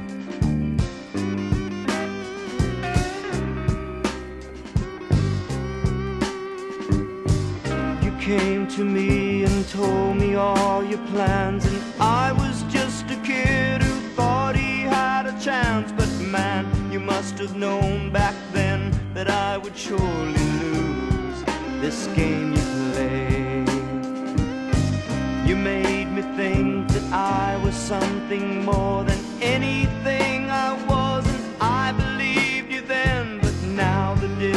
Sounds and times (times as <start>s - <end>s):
Music: 0.0s - 34.5s
Male singing: 7.7s - 24.1s, 25.4s - 34.5s.